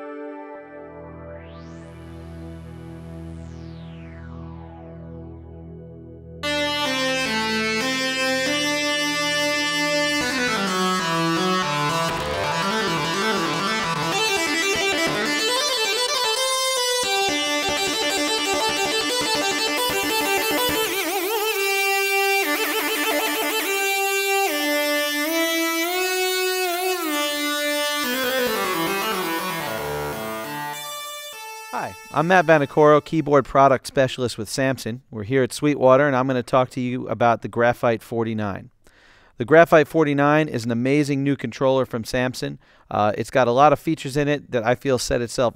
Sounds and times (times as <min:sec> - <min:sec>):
Music: 0:00.0 - 0:33.4
Speech: 0:31.8 - 0:38.7, 0:39.4 - 0:45.5.